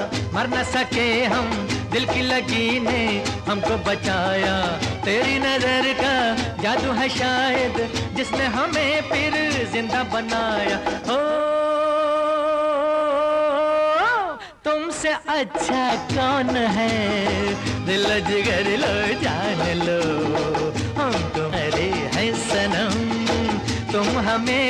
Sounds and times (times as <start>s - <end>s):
Music of Bollywood: 0.0s - 24.6s.